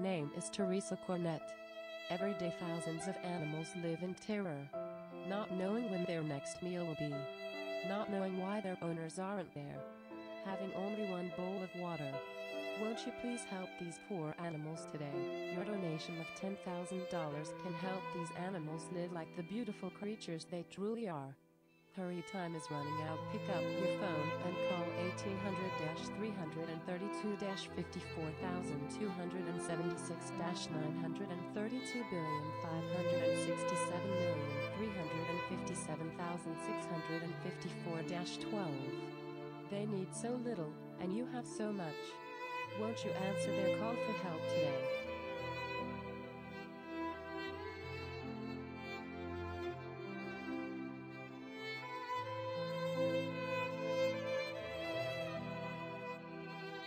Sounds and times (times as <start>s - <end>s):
Violin, fiddle: 0.0s - 8.9s, 9.7s - 20.3s, 22.0s - 56.8s.